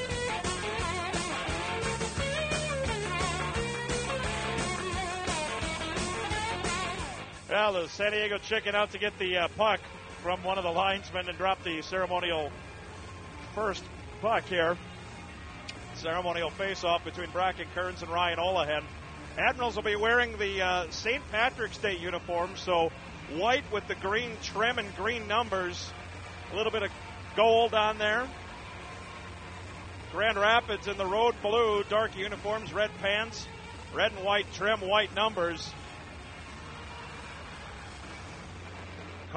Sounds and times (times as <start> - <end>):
Music: 0.0 - 39.3
Speech: 7.5 - 12.5, 13.5 - 14.8, 16.0 - 28.3, 30.1 - 35.8.